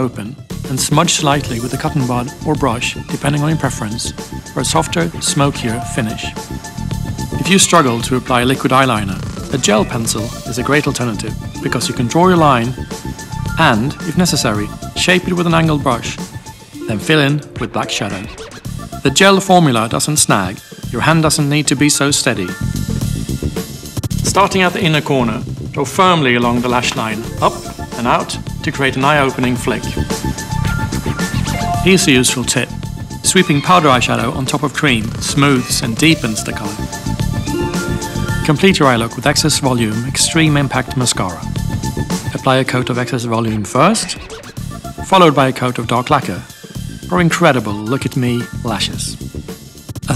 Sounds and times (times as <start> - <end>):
Speech: 0.0 - 6.4, 7.4 - 12.8, 13.6 - 16.2, 16.8 - 22.7, 24.2 - 30.1, 31.4 - 36.9, 38.4 - 41.5, 42.3 - 44.4, 45.0 - 49.2
Music: 0.0 - 50.1.